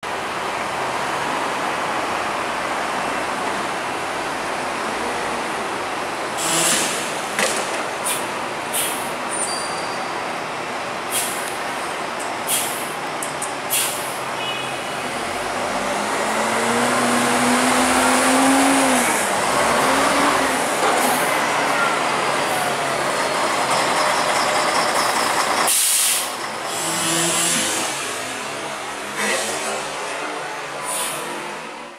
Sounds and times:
Bus: 0.0s - 31.9s.

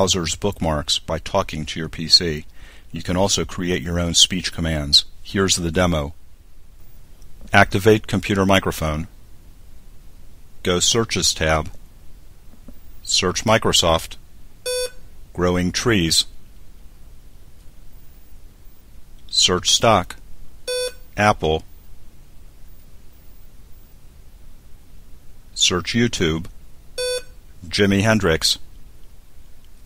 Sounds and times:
Male speech, man speaking: 0.0s - 6.2s, 7.5s - 9.1s, 10.6s - 11.8s, 13.0s - 14.2s, 15.4s - 16.3s, 19.3s - 20.2s, 21.2s - 21.6s, 25.6s - 26.5s, 27.6s - 28.7s
Narration, monologue: 0.0s - 29.8s.

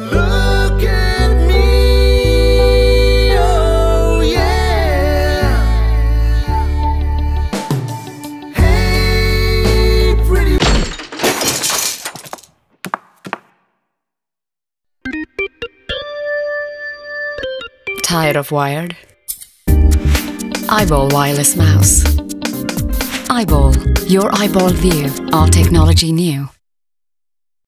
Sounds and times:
Music: 0.0s - 10.6s, 15.0s - 18.0s, 19.7s - 26.1s
Speech: 18.0s - 19.0s, 20.7s - 22.2s, 23.3s - 26.6s.

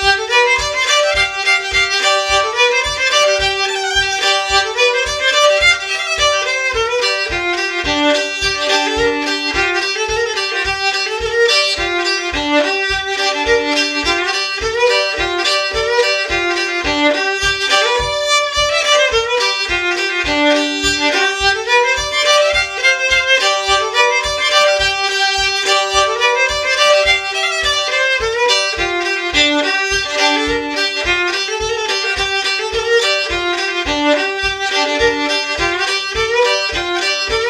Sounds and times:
Violin, fiddle: 0.0s - 37.4s.

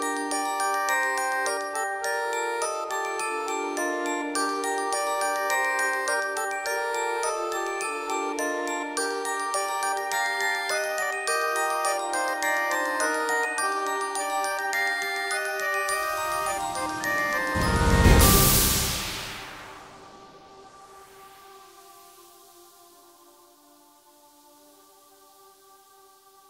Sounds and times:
Music: 0.0s - 26.5s.

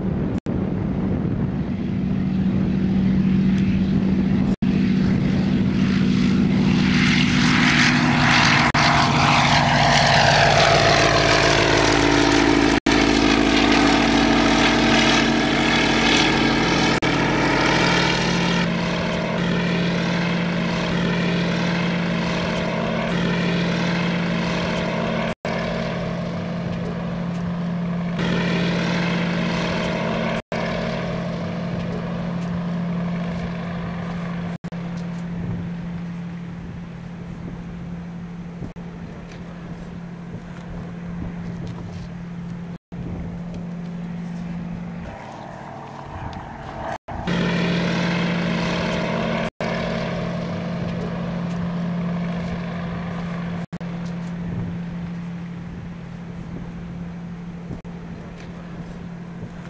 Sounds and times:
Wind noise (microphone): 0.0s - 9.8s, 35.3s - 42.2s, 42.9s - 43.7s, 54.4s - 59.6s
Fixed-wing aircraft, airplane: 0.0s - 59.6s.

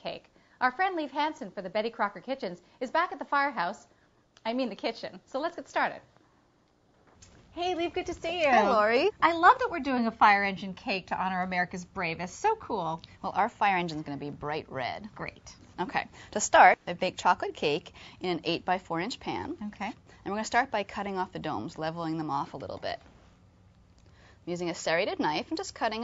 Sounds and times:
Speech: 0.0s - 6.1s, 7.6s - 23.0s, 24.5s - 26.0s.

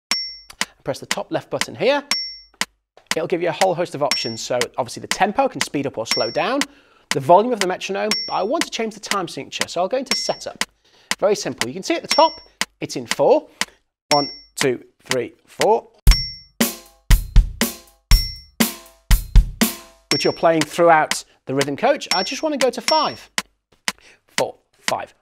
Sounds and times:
Speech: 0.8s - 2.1s, 3.2s - 10.6s, 11.2s - 13.5s, 14.1s - 16.0s, 20.2s - 23.3s, 24.4s - 25.2s
Drum: 16.1s - 23.5s
Drum kit: 16.1s - 23.5s.

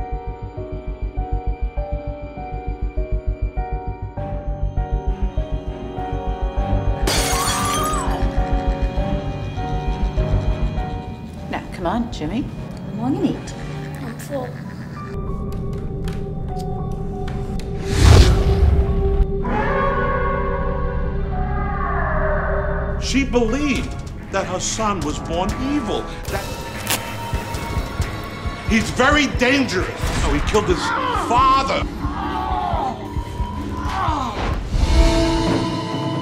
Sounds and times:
Scary music: 0.0s - 36.2s.

